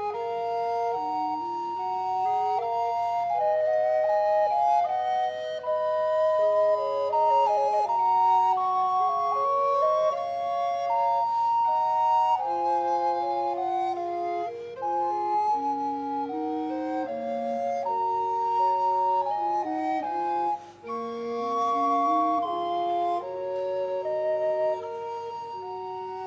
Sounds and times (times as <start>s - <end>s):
Soul music: 0.0s - 26.2s.